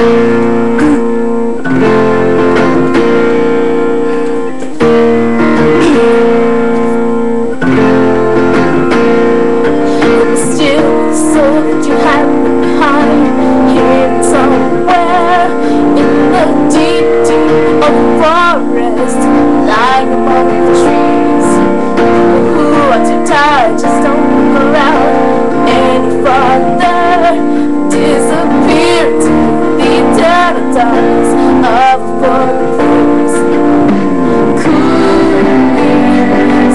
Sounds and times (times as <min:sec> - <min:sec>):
Music: 0:00.0 - 0:36.7
Female singing: 0:10.1 - 0:21.6, 0:22.3 - 0:33.4, 0:34.6 - 0:36.7.